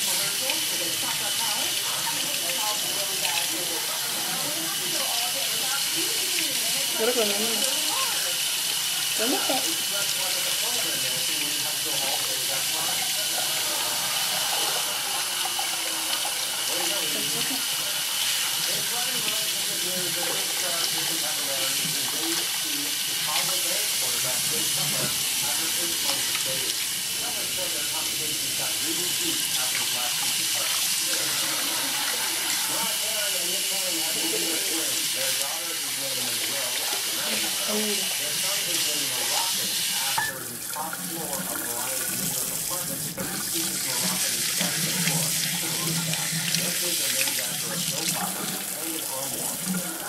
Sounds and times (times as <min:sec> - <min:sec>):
Speech: 0:00.0 - 0:50.0.